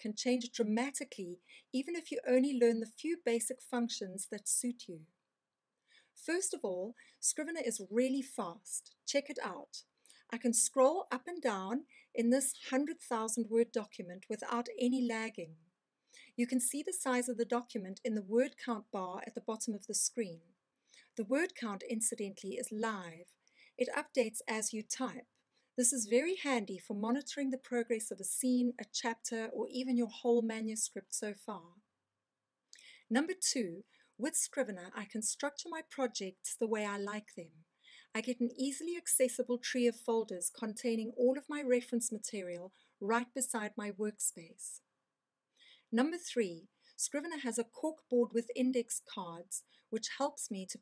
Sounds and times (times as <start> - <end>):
Speech: 0.0 - 5.1, 6.2 - 15.6, 16.3 - 20.4, 21.2 - 25.2, 25.8 - 31.8, 33.1 - 37.5, 38.1 - 44.8, 45.9 - 50.8.